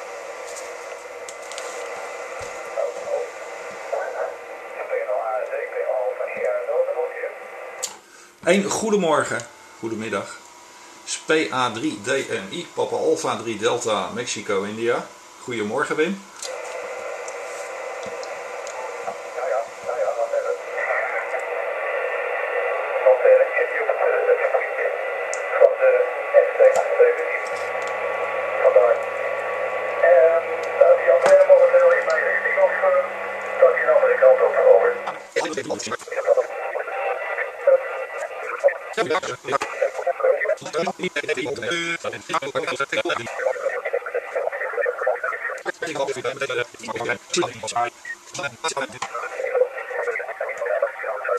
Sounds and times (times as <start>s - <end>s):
Radio: 0.0s - 7.8s, 11.1s - 51.3s
Speech: 4.0s - 7.4s, 8.4s - 10.4s, 11.1s - 16.2s, 19.4s - 21.4s, 22.6s - 27.4s, 30.0s - 51.3s.